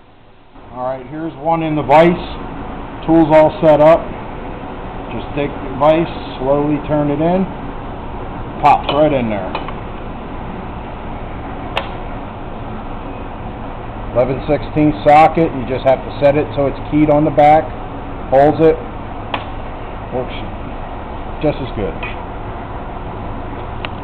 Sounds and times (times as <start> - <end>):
Vehicle: 0.0 - 24.0
Speech: 0.8 - 2.4, 3.0 - 4.1, 5.1 - 7.5, 8.6 - 9.6, 14.2 - 17.7, 18.3 - 18.8, 20.1 - 20.5, 21.4 - 22.2.